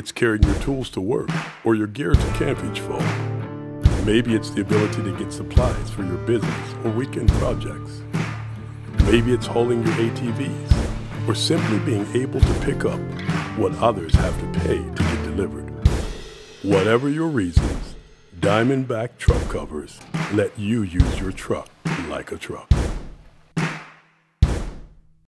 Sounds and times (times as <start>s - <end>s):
Speech: 0.0s - 3.2s, 4.0s - 8.0s, 9.0s - 15.8s, 16.6s - 22.7s
Music: 0.0s - 22.2s.